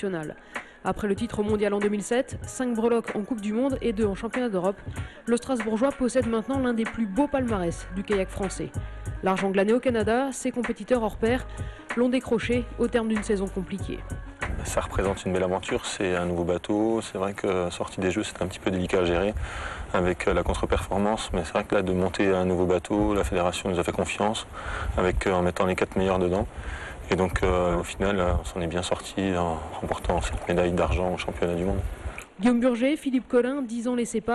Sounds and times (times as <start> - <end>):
Speech: 0.0 - 26.5, 27.1 - 34.3.